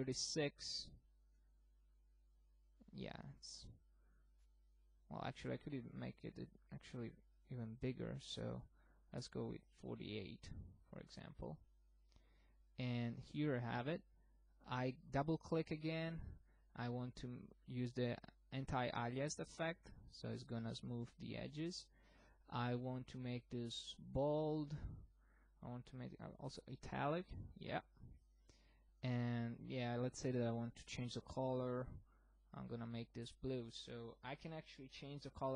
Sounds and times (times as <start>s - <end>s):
Speech: 0.0s - 1.0s, 2.8s - 3.8s, 5.1s - 11.7s, 12.8s - 21.9s, 22.5s - 28.1s, 29.0s - 35.5s.